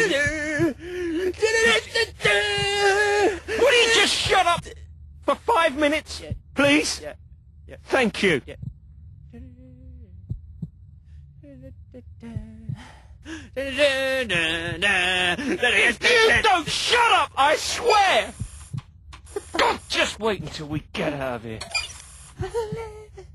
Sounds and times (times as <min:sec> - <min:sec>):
Speech: 0:00.0 - 0:08.6, 0:09.4 - 0:10.0, 0:13.5 - 0:18.4, 0:19.5 - 0:21.7, 0:22.4 - 0:23.3.